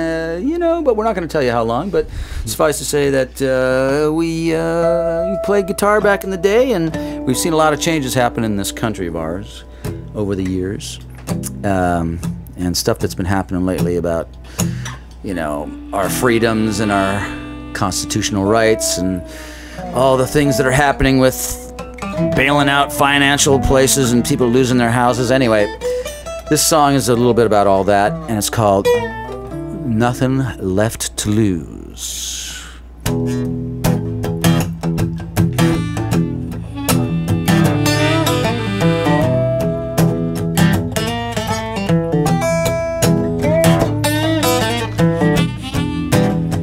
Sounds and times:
Speech: 0:00.0 - 0:09.6, 0:10.2 - 0:14.3, 0:15.2 - 0:21.7, 0:22.3 - 0:25.8, 0:26.5 - 0:29.0, 0:29.7 - 0:32.6
Music: 0:03.8 - 0:31.6, 0:33.0 - 0:46.6.

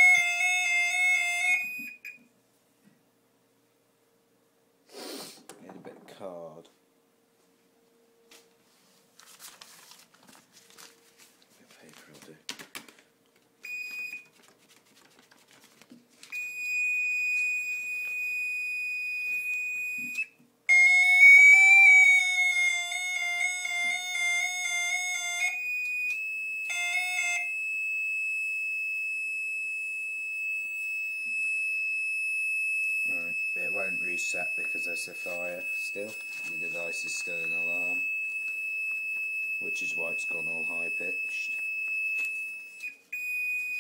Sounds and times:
Fire alarm: 0:00.0 - 0:02.2, 0:13.6 - 0:14.3, 0:16.3 - 0:43.8.

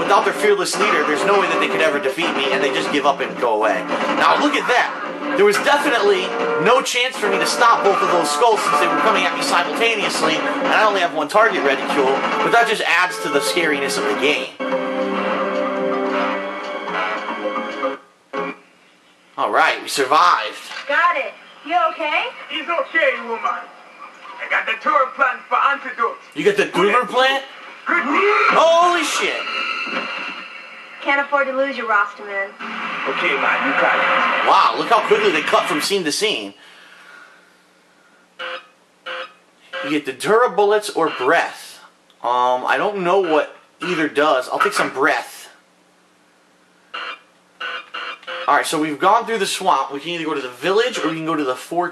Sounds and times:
Speech: 0:00.0 - 0:14.6, 0:24.4 - 0:29.4, 0:33.1 - 0:36.6, 0:39.8 - 0:45.6, 0:48.5 - 0:51.9.

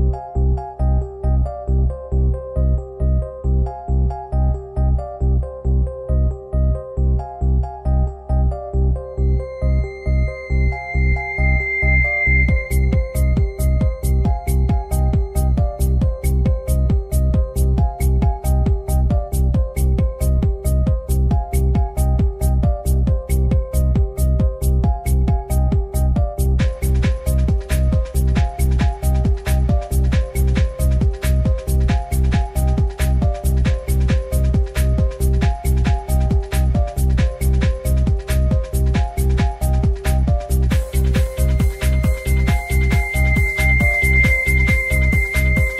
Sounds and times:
Disco: 0:09.6 - 0:45.7.

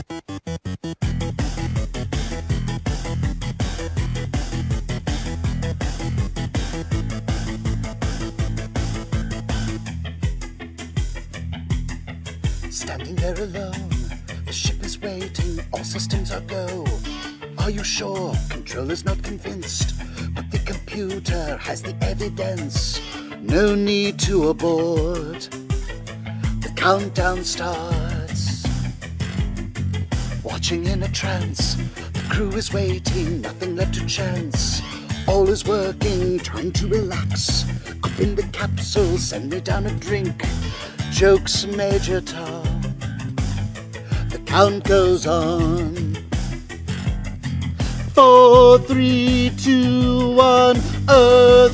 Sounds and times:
Music: 0:00.0 - 0:51.7.

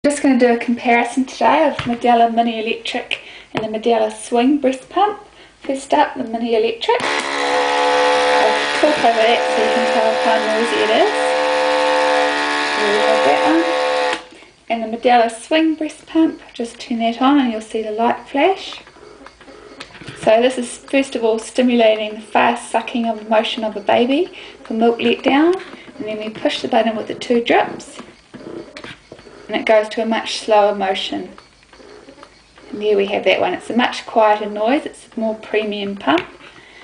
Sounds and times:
Speech: 0:00.0 - 0:07.0, 0:08.4 - 0:11.3, 0:14.7 - 0:18.8, 0:20.2 - 0:28.0, 0:29.5 - 0:31.4, 0:32.7 - 0:36.3.

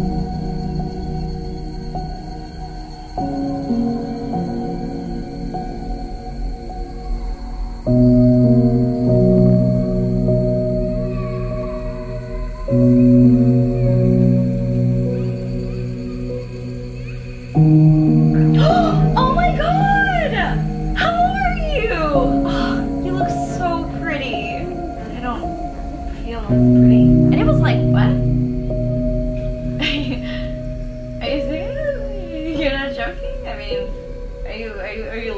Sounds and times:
Ambient music: 0:00.0 - 0:35.3.

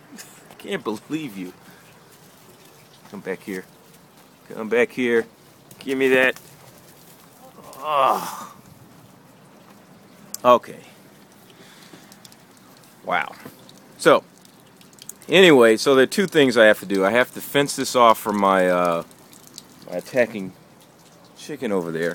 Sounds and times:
Speech: 0:00.6 - 0:01.6, 0:03.1 - 0:03.7, 0:04.5 - 0:06.4, 0:10.4 - 0:11.0, 0:15.3 - 0:19.0, 0:19.9 - 0:20.5, 0:21.4 - 0:22.1.

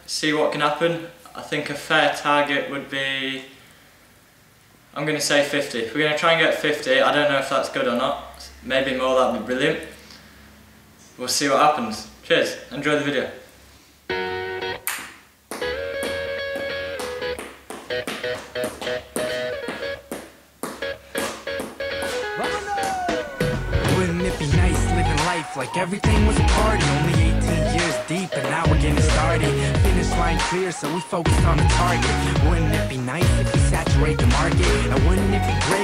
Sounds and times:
Speech: 0:00.1 - 0:03.5, 0:05.0 - 0:09.9, 0:11.2 - 0:13.4.

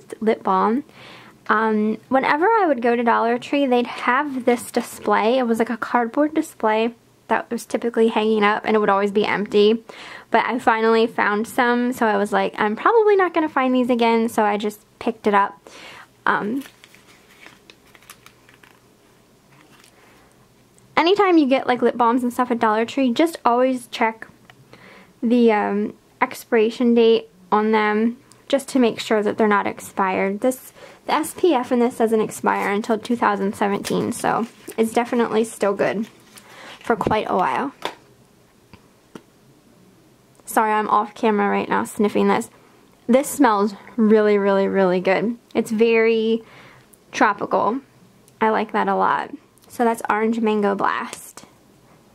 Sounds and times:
Speech: 0:00.0 - 0:00.9, 0:01.5 - 0:15.6, 0:16.2 - 0:16.7, 0:21.0 - 0:24.3, 0:25.2 - 0:36.1, 0:36.8 - 0:37.8, 0:40.4 - 0:42.5, 0:43.1 - 0:46.4, 0:47.1 - 0:51.5.

